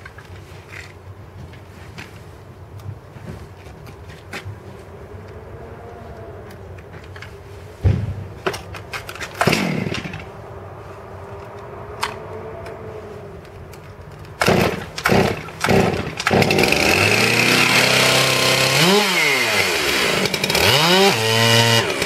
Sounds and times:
Chainsaw: 9.4 - 10.3, 14.4 - 22.0.

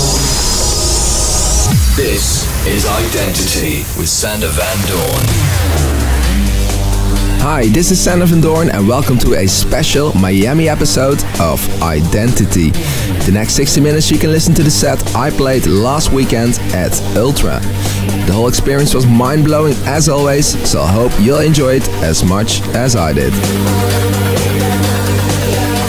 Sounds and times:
Speech: 0.0 - 0.6, 1.8 - 5.4, 7.4 - 23.4
Exciting music: 0.0 - 25.8.

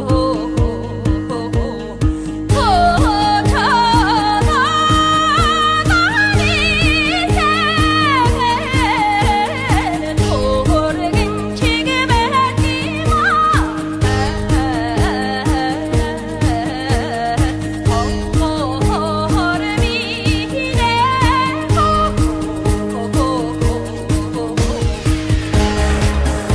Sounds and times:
Folk music: 0.0 - 26.5.

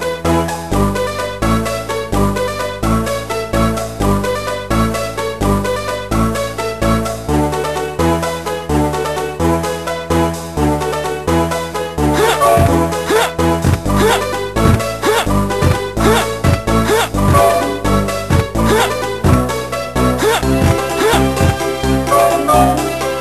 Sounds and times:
Video game music: 0.0 - 23.2.

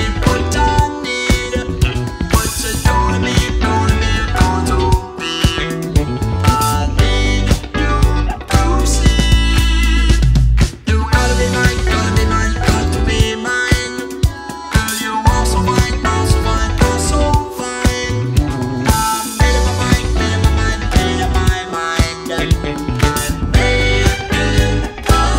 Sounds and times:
Music: 0.0 - 25.3.

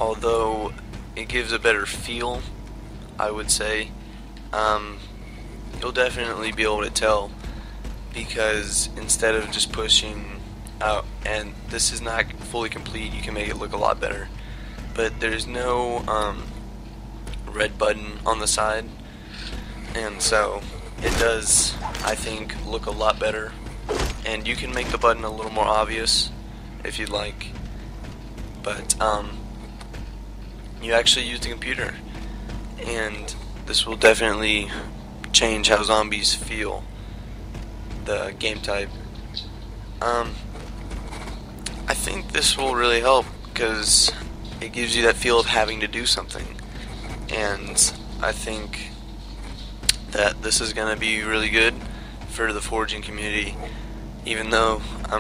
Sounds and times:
Speech: 0.0 - 2.5, 3.2 - 3.9, 4.5 - 5.1, 5.8 - 7.4, 8.2 - 14.4, 15.0 - 16.5, 17.4 - 23.6, 24.2 - 27.5, 28.6 - 29.4, 30.8 - 32.0, 32.8 - 36.8, 38.1 - 38.9, 40.0 - 40.4, 41.7 - 46.6, 47.3 - 49.0, 50.0 - 53.7, 54.3 - 55.2.

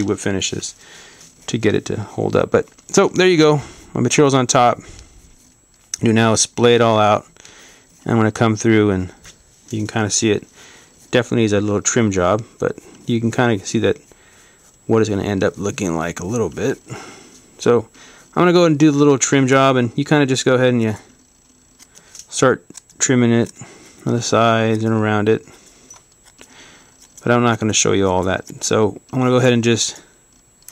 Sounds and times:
Speech: 0.0 - 0.8, 1.5 - 4.8, 6.0 - 7.3, 8.0 - 10.5, 11.1 - 14.0, 14.9 - 16.8, 17.6 - 21.1, 22.3 - 25.4, 27.2 - 30.0.

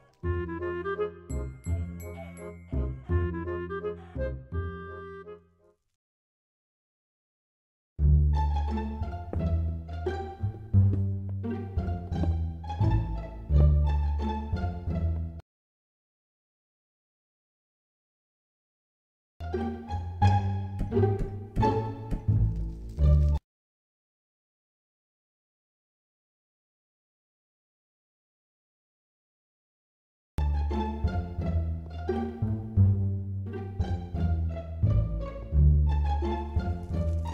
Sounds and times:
Music: 0.0 - 5.9, 8.0 - 15.4, 19.4 - 23.4, 30.4 - 37.3.

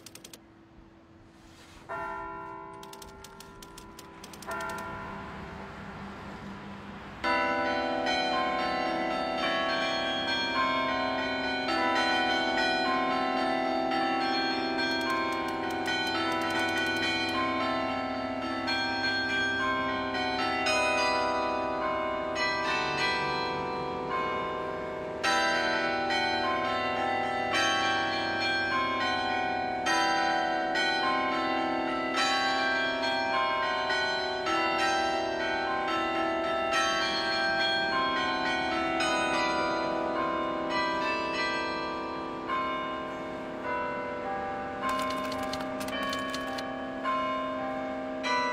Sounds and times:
Change ringing (campanology): 1.9 - 48.5.

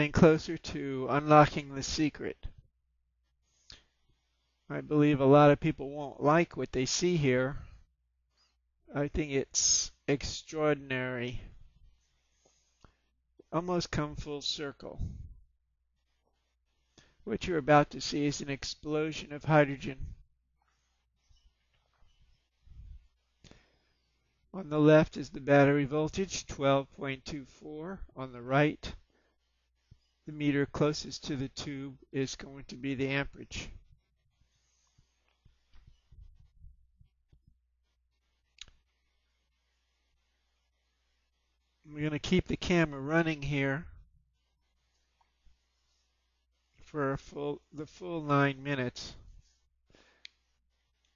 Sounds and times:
Speech: 0.0 - 2.6, 4.7 - 7.7, 8.9 - 11.6, 13.4 - 15.2, 17.3 - 20.2, 24.6 - 29.0, 30.3 - 33.8, 41.9 - 44.0, 46.9 - 49.2.

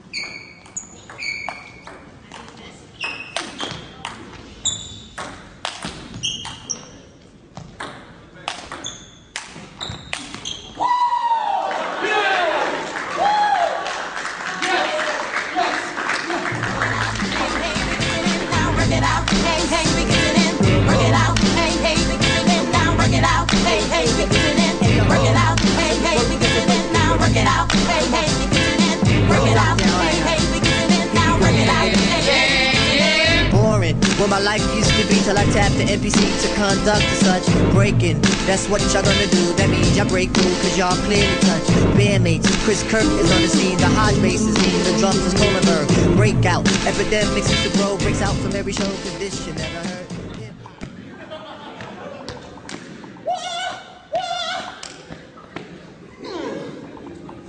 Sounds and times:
Music: 16.5 - 50.5.

